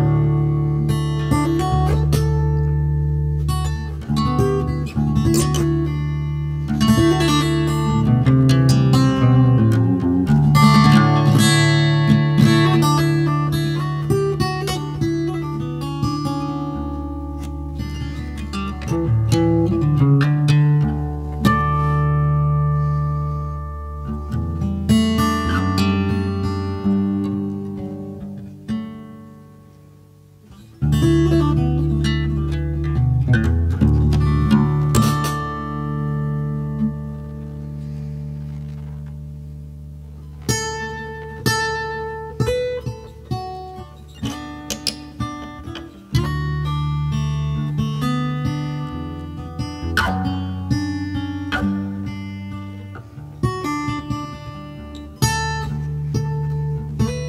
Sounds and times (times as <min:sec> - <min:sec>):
Acoustic guitar: 0:00.0 - 0:57.2
Electric guitar: 0:00.0 - 0:57.2.